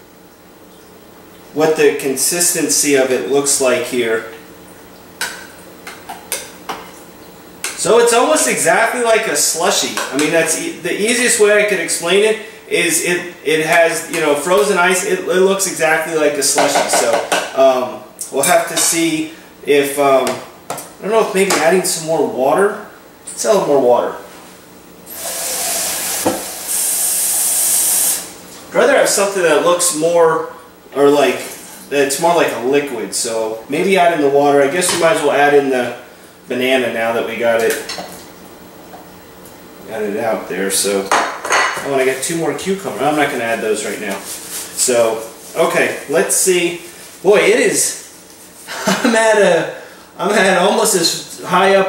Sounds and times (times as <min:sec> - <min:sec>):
Speech: 0:01.6 - 0:04.4, 0:07.8 - 0:24.3, 0:28.7 - 0:37.9, 0:39.8 - 0:41.2, 0:41.8 - 0:48.1, 0:48.9 - 0:51.8.